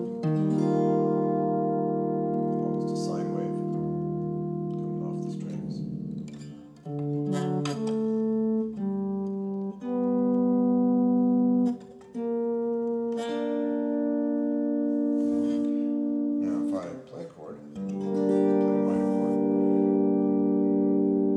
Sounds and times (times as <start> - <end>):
Acoustic guitar: 0.0 - 21.3
Synthesizer: 0.0 - 21.3
Speech: 2.6 - 3.7, 5.0 - 5.9, 16.4 - 17.8, 18.8 - 19.3.